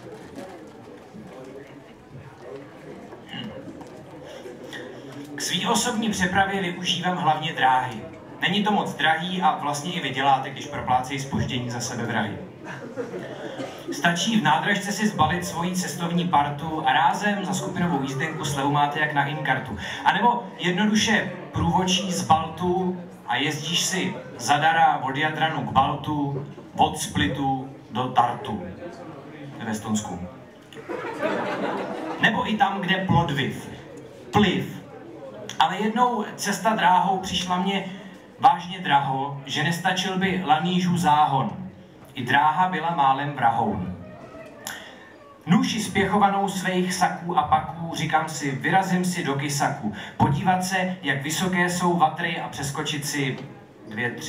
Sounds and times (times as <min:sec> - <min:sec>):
Speech: 0:00.0 - 0:30.5, 0:31.6 - 0:54.2.